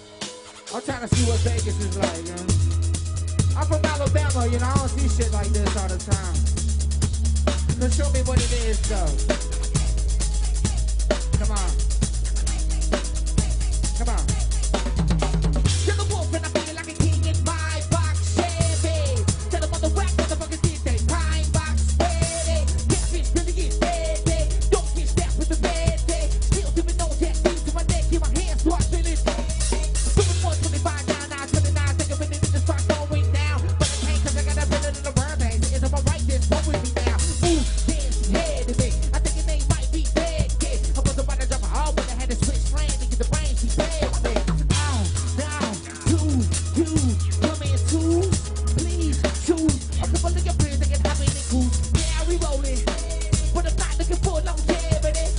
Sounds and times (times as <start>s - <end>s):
Disco: 0.0s - 55.3s.